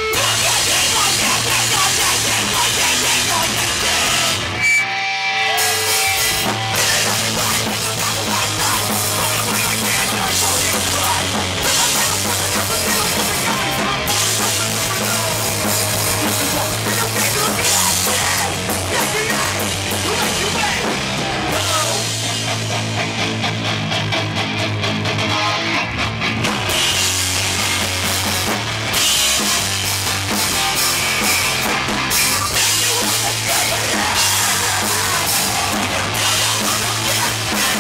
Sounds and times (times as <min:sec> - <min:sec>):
Singing: 0:00.0 - 0:04.5, 0:06.7 - 0:22.1, 0:32.1 - 0:37.8
Music: 0:00.0 - 0:37.8.